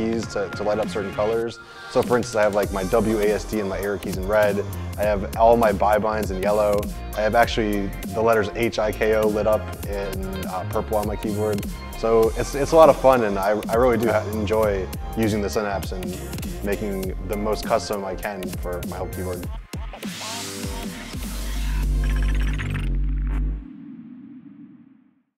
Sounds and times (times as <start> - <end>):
Speech: 0.0 - 20.8
Music: 0.0 - 25.2.